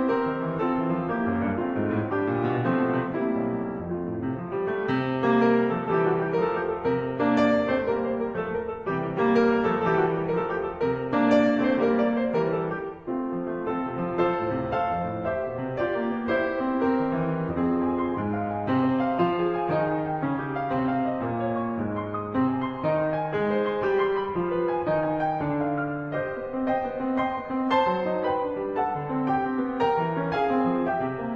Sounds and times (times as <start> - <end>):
Piano: 0.0 - 31.3.